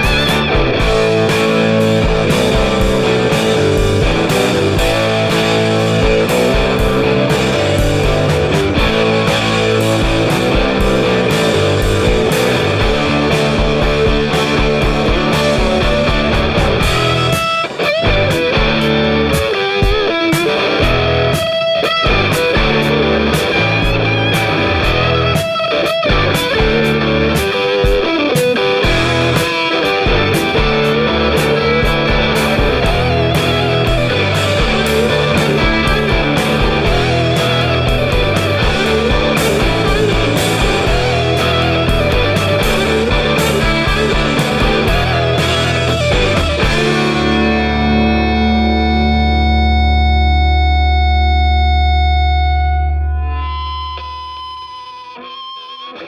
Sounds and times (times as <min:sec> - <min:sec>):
Distortion: 0:00.0 - 0:56.0
Effects unit: 0:00.0 - 0:56.0
Music: 0:00.0 - 0:56.0.